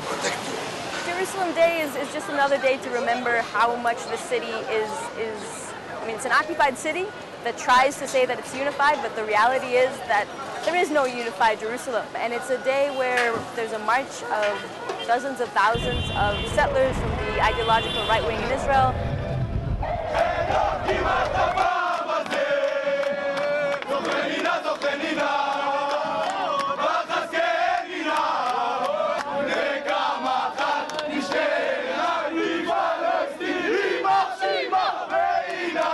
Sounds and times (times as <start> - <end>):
Outside, urban or manmade: 0.0 - 35.9.